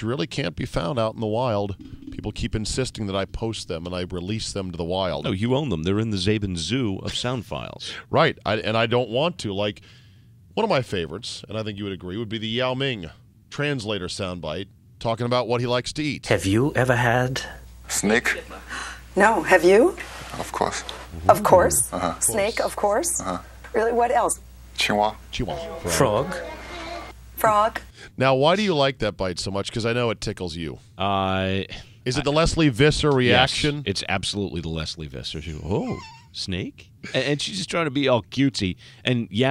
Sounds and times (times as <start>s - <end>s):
Speech: 0.0s - 9.8s, 10.6s - 16.9s, 19.2s - 26.7s, 27.5s - 39.5s.